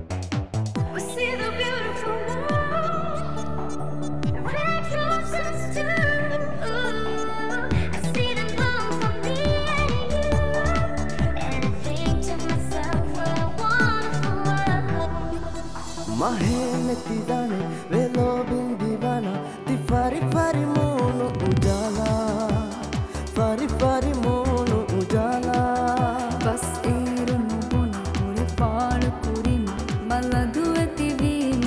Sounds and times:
Music of Asia: 0.0s - 31.6s
Singing: 0.9s - 31.6s.

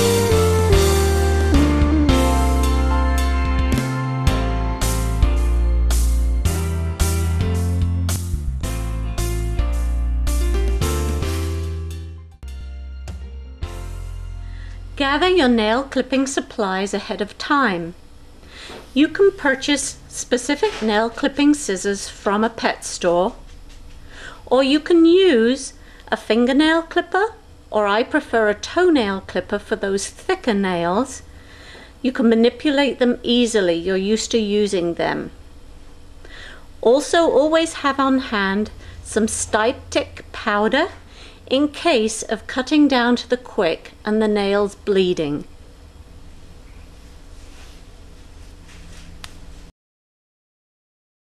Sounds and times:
Speech: 15.0s - 18.0s, 19.0s - 23.4s, 24.5s - 31.2s, 32.0s - 35.4s, 36.8s - 45.5s.

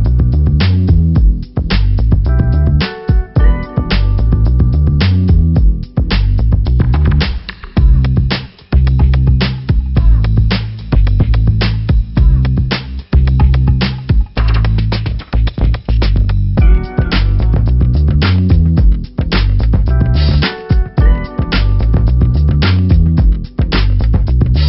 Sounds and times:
Music: 0.0s - 24.6s.

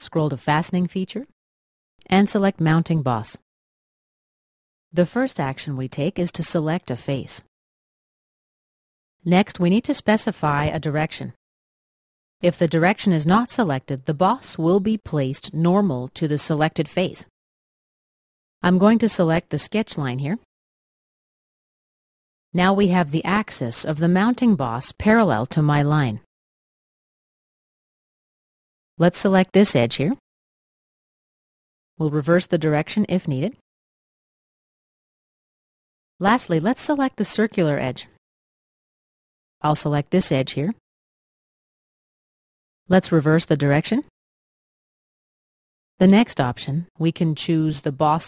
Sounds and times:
Speech: 0.0s - 1.3s, 2.0s - 3.4s, 5.0s - 7.5s, 9.3s - 11.4s, 12.4s - 17.3s, 18.6s - 20.5s, 22.6s - 26.3s, 29.0s - 30.2s, 32.0s - 33.6s, 36.2s - 38.2s, 39.6s - 40.8s, 42.9s - 44.1s, 46.0s - 48.2s.

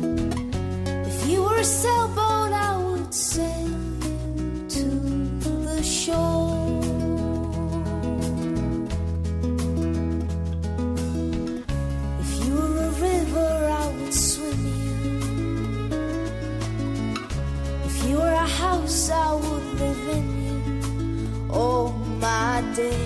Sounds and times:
Music: 0.0s - 23.0s.

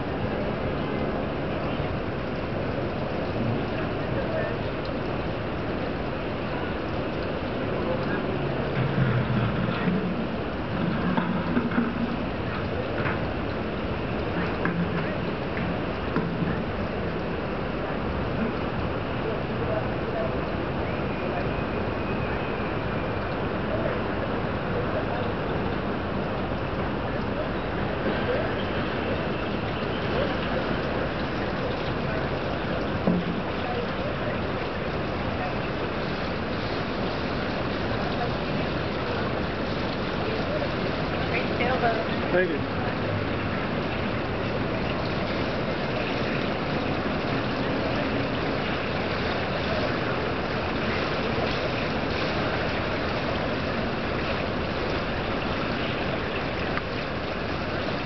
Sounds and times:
Sailboat, sailing ship: 0.0s - 58.0s
Speech: 3.4s - 5.0s, 7.5s - 10.2s, 19.2s - 22.5s, 23.6s - 25.8s, 27.0s - 35.9s, 37.9s - 39.5s, 40.1s - 45.0s.

